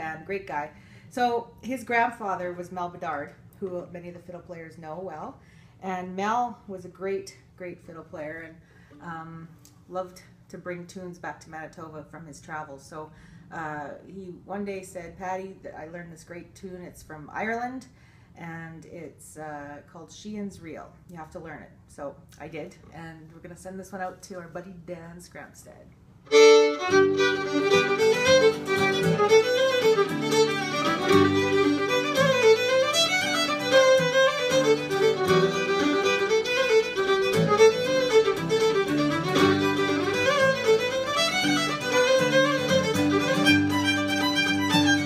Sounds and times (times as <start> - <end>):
Speech: 0.0 - 25.9.